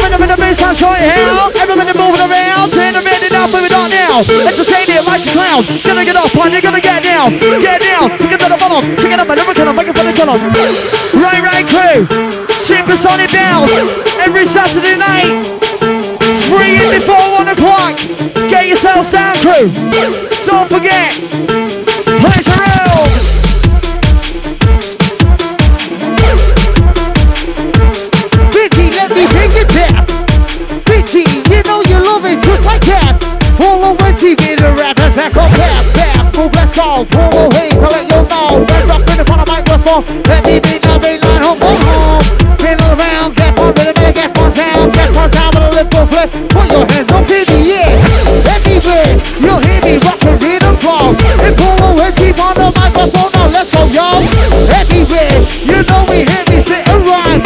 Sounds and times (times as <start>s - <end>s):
House music: 0.0s - 57.4s.